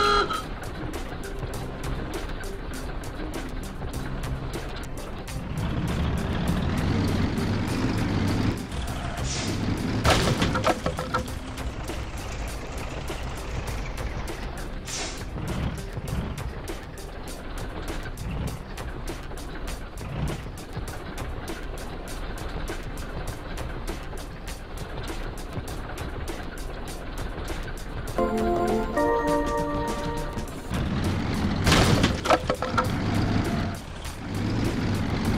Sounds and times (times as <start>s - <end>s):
Music: 0.0s - 35.3s
Truck: 0.0s - 35.3s.